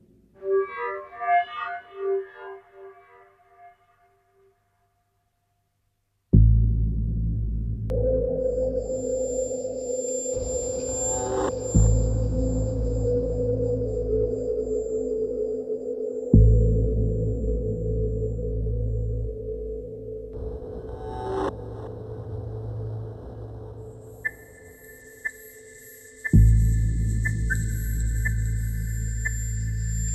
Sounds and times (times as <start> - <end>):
Music: 0.0 - 5.0, 6.3 - 30.1.